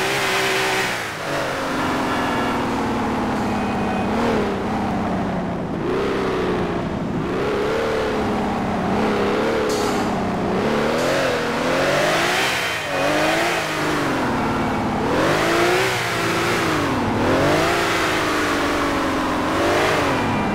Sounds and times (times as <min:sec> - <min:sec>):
Car: 0:00.0 - 0:20.5.